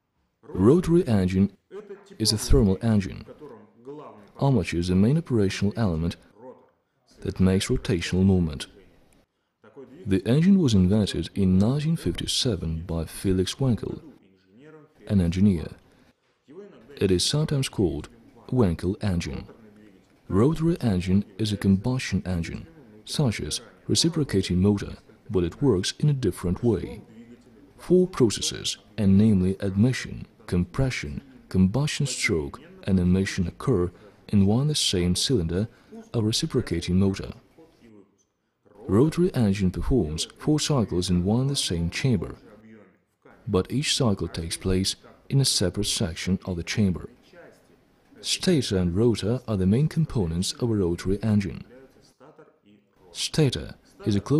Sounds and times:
Speech: 0.4 - 15.8, 16.5 - 54.3.

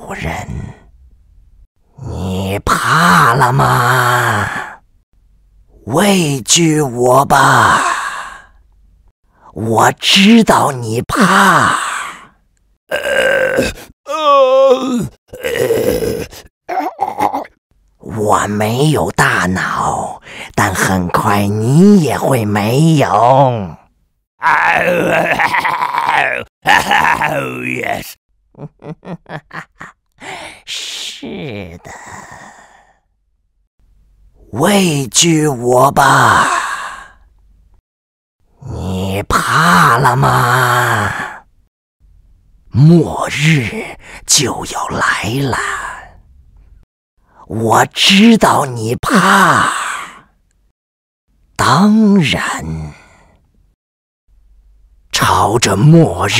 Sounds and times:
Speech: 0.0 - 0.9, 2.0 - 4.8, 5.8 - 8.2, 9.5 - 12.1, 12.9 - 15.6, 16.7 - 25.4, 26.0 - 28.2, 30.2 - 32.1, 34.4 - 37.1, 38.6 - 41.4, 42.7 - 46.1, 47.4 - 50.2, 51.6 - 53.0, 55.1 - 56.3
Groan: 7.4 - 8.5, 11.2 - 17.6, 24.4 - 28.0, 29.6 - 33.1, 36.1 - 37.2, 39.6 - 41.4, 49.0 - 50.3.

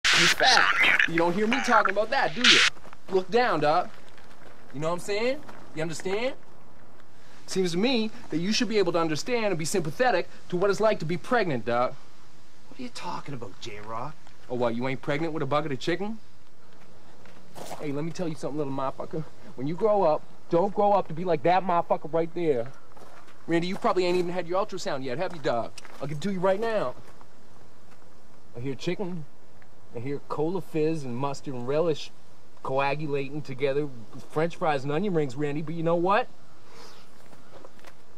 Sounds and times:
Speech: 0.1 - 3.9, 4.7 - 6.4, 7.5 - 12.0, 12.7 - 16.2, 17.7 - 22.7, 23.5 - 27.0, 28.6 - 29.3, 30.0 - 36.3.

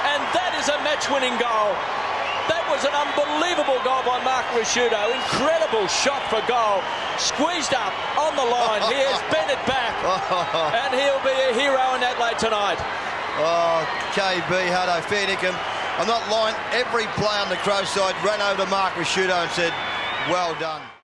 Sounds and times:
Speech: 0.0 - 1.8, 2.5 - 12.8, 13.4 - 20.9.

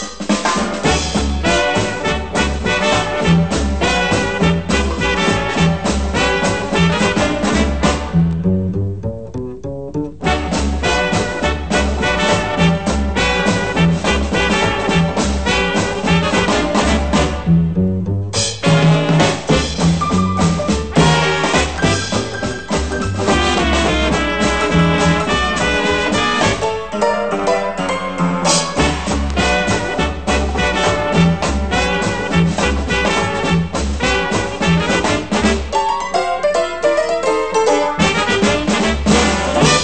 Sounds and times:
Steelpan: 18.4 - 39.8.

